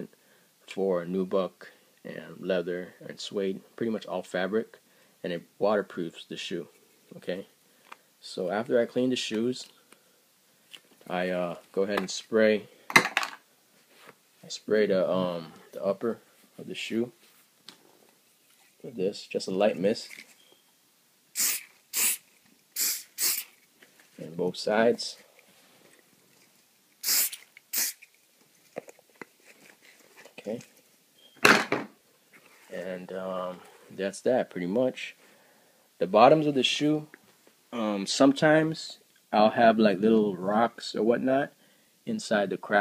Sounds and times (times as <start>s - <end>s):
Inside, small room: 0.0s - 42.8s
Speech: 0.7s - 7.5s, 8.2s - 9.8s, 11.1s - 12.7s, 14.4s - 17.2s, 18.8s - 20.1s, 24.2s - 25.3s, 30.4s - 30.7s, 32.7s - 35.2s, 36.0s - 37.2s, 37.8s - 42.8s.